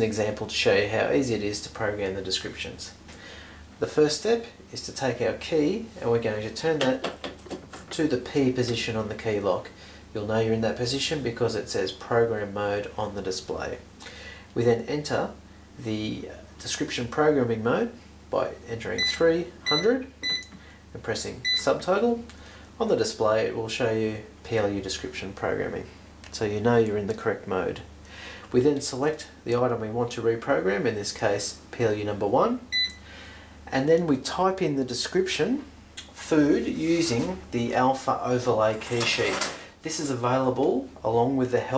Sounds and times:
Speech: 0:00.0 - 0:03.0, 0:03.8 - 0:07.2, 0:07.9 - 0:13.9, 0:14.6 - 0:20.2, 0:21.0 - 0:27.9, 0:28.5 - 0:32.7, 0:33.7 - 0:41.7.

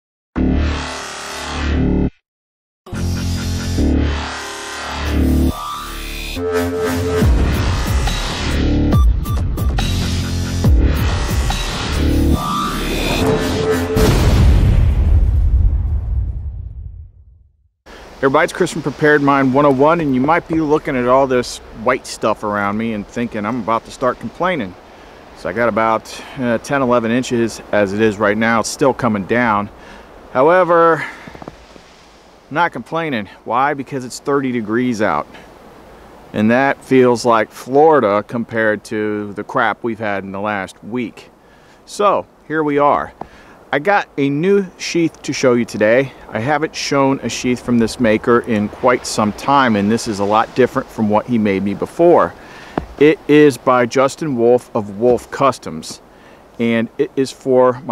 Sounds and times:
Music: 0:02.9 - 0:14.2.

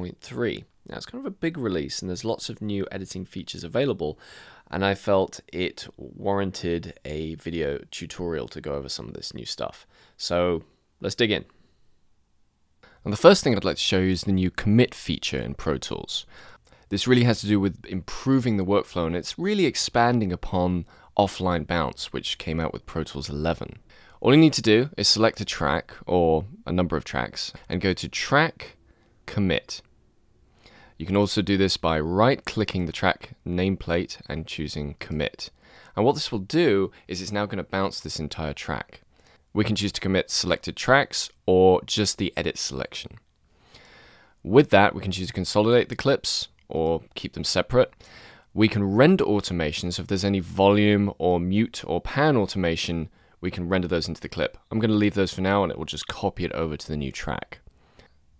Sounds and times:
Speech: 0:00.0 - 0:11.5, 0:13.0 - 0:16.3, 0:16.9 - 0:29.9, 0:31.0 - 0:43.2, 0:44.4 - 0:48.0, 0:48.6 - 0:57.7.

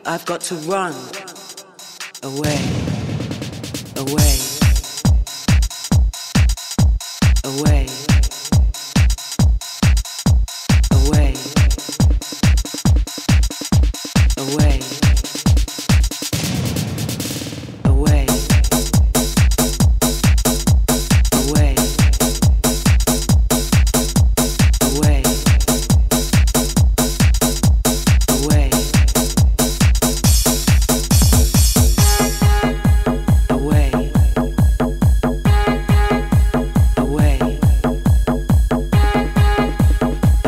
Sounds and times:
Music: 0:00.0 - 0:40.4.

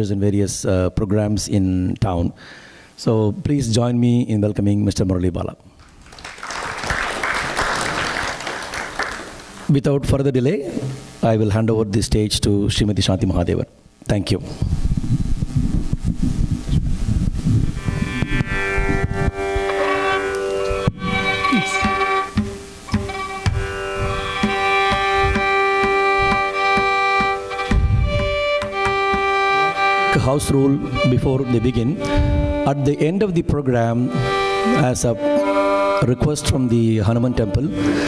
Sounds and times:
Speech: 0:00.0 - 0:02.4, 0:03.0 - 0:05.6, 0:09.7 - 0:14.5, 0:30.1 - 0:32.0, 0:32.7 - 0:35.2, 0:36.0 - 0:37.8
Music: 0:17.7 - 0:38.0.

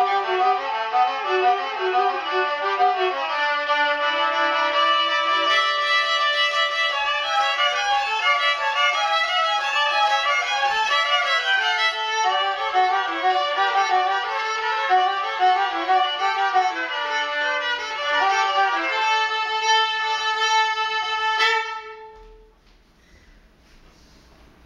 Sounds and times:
Violin, fiddle: 0:00.0 - 0:22.4.

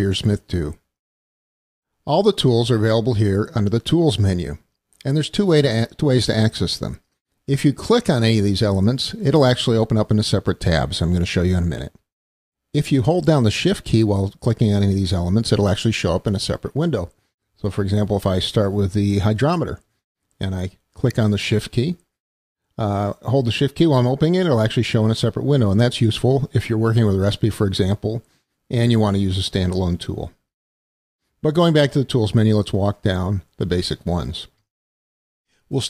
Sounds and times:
Speech: 0:00.0 - 0:00.9, 0:02.0 - 0:12.0, 0:12.8 - 0:22.1, 0:22.8 - 0:30.4, 0:31.4 - 0:34.6, 0:35.7 - 0:35.8.

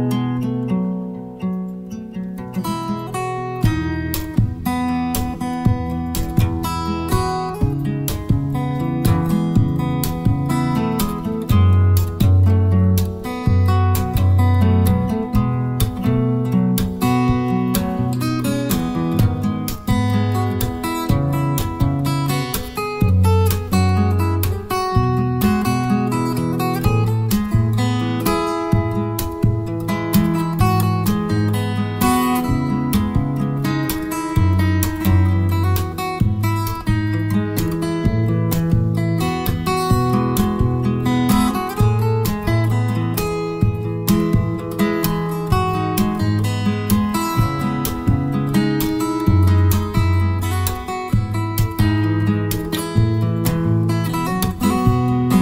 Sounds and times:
Acoustic guitar: 0:00.0 - 0:55.4.

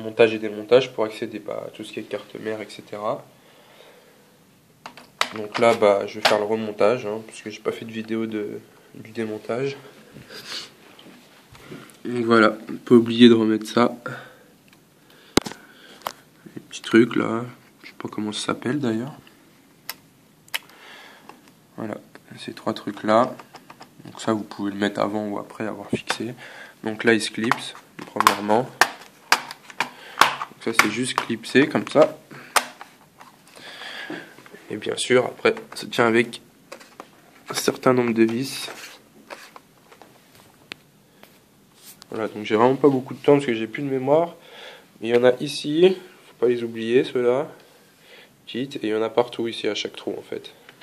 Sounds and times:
Speech: 0:00.0 - 0:03.3, 0:05.3 - 0:09.9, 0:12.0 - 0:14.3, 0:16.5 - 0:19.3, 0:21.8 - 0:23.4, 0:24.0 - 0:28.8, 0:30.6 - 0:32.2, 0:34.6 - 0:36.5, 0:37.5 - 0:38.8, 0:42.1 - 0:44.4, 0:45.0 - 0:47.6, 0:48.5 - 0:50.6.

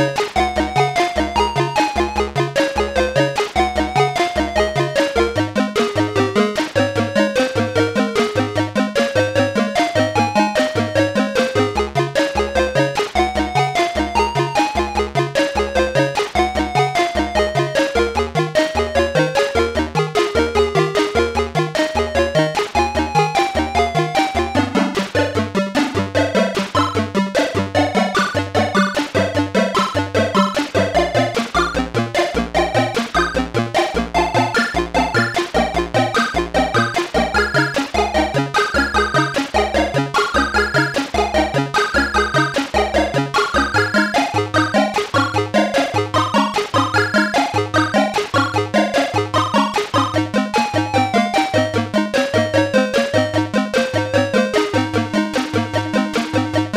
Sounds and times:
Video game music: 0:00.0 - 0:56.7.

